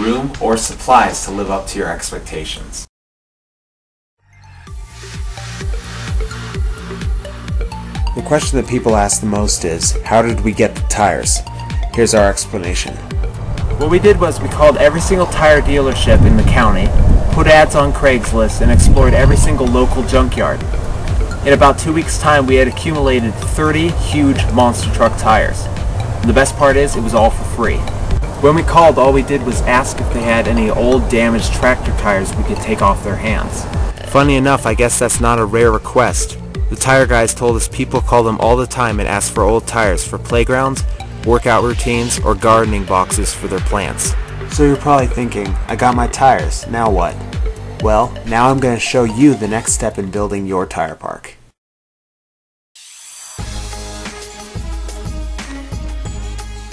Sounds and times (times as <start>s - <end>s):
Music: 0.0s - 2.5s, 4.2s - 51.0s, 52.8s - 56.7s
Speech: 0.0s - 2.9s, 8.2s - 13.0s, 13.8s - 20.6s, 21.4s - 47.2s, 47.8s - 51.4s.